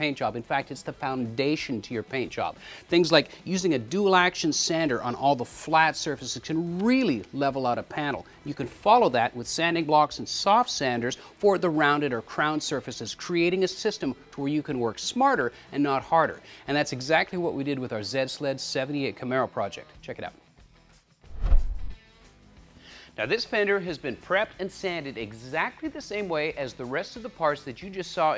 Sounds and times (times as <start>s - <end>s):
Speech: 0.0s - 20.4s, 23.2s - 28.3s.